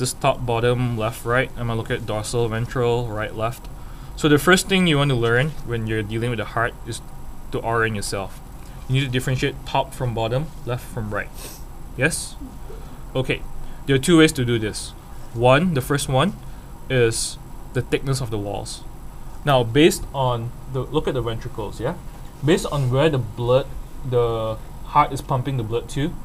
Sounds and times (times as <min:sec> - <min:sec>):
Speech: 0:00.0 - 0:11.4, 0:12.0 - 0:12.6, 0:13.2 - 0:26.2.